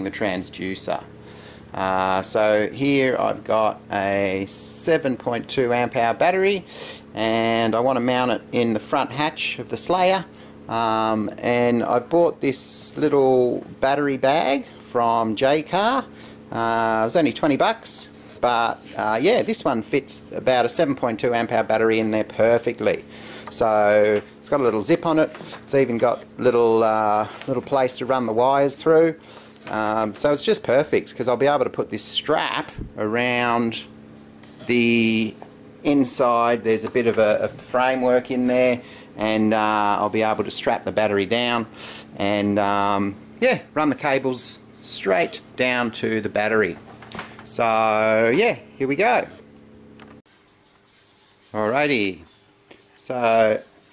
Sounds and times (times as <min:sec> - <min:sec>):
Speech: 0:00.0 - 0:01.1, 0:01.7 - 0:33.9, 0:34.6 - 0:46.8, 0:47.5 - 0:49.4, 0:51.5 - 0:52.3, 0:53.0 - 0:53.7.